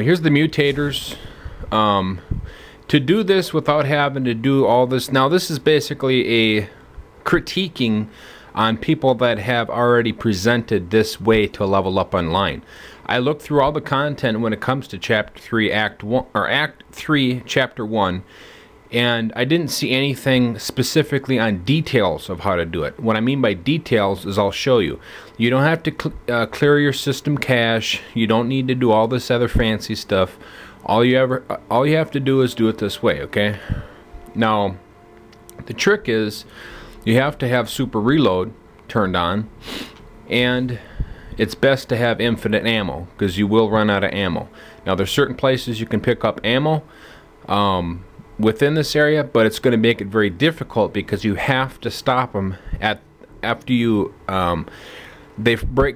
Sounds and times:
Speech: 0.0 - 2.3, 2.9 - 18.3, 18.9 - 34.8, 35.6 - 39.5, 40.3 - 46.9, 47.5 - 54.7, 55.4 - 55.9.

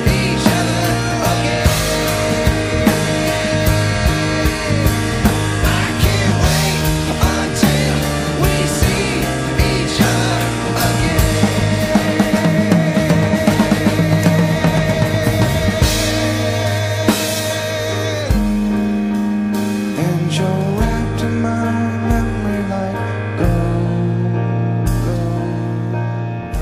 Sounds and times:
Independent music: 0.0 - 26.6.

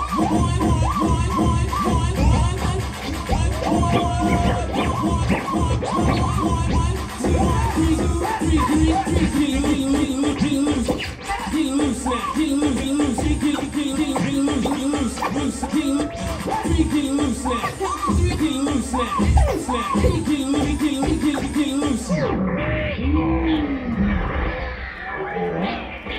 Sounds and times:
Hip hop music: 0.0 - 24.2, 24.9 - 26.1.

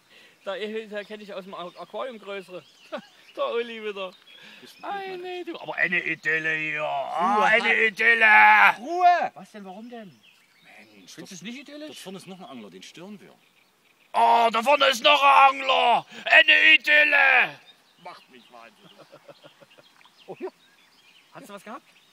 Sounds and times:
Speech: 4.7 - 13.4.

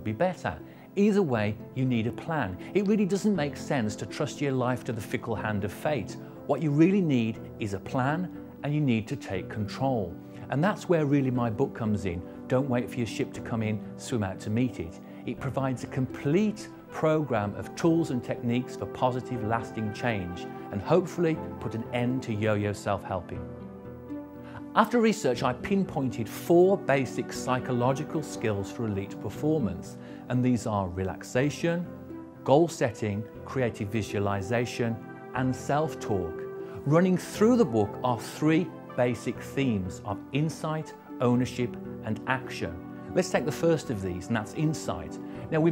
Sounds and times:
Speech: 0.0 - 23.4, 24.6 - 45.7
Music: 0.0 - 45.7.

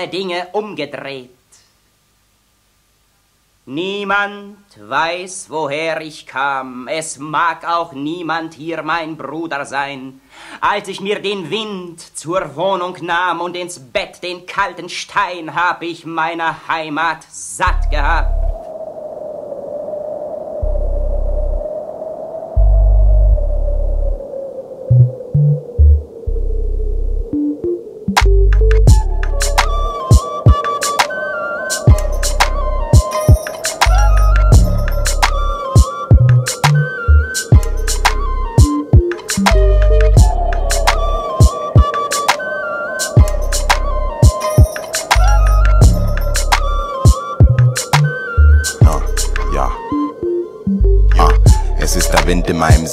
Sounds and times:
Wind noise (microphone): 18.0 - 27.4
Music: 27.4 - 52.9.

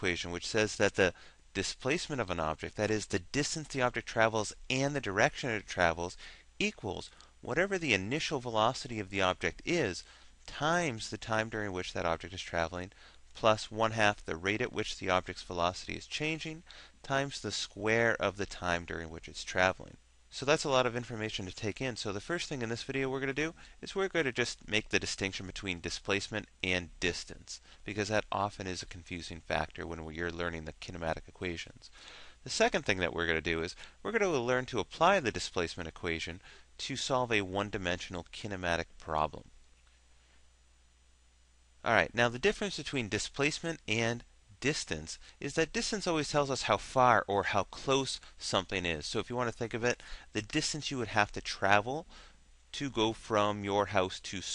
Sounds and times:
Speech: 0.0 - 39.5, 41.8 - 52.1, 52.7 - 54.5.

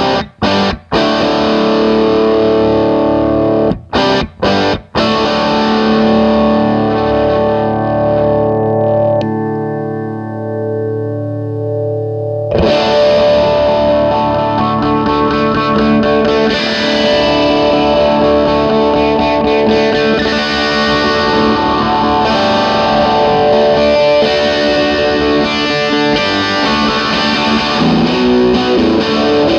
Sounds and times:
Guitar: 0.0 - 29.5.

